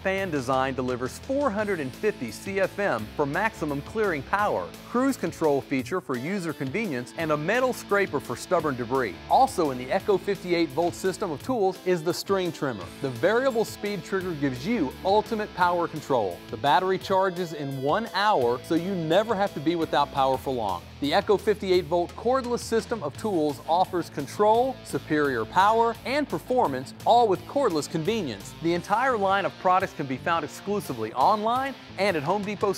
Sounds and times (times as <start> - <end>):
Music: 0.0 - 32.7
Speech: 0.0 - 32.7.